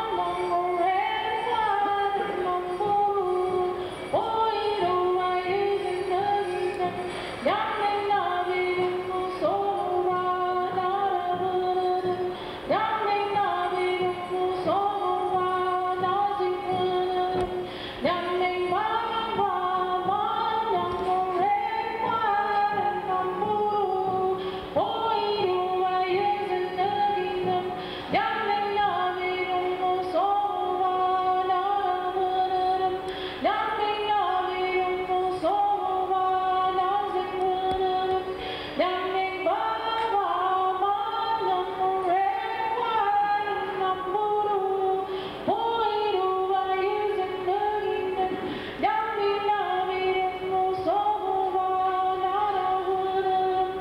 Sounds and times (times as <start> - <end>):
Female singing: 0.0 - 53.8.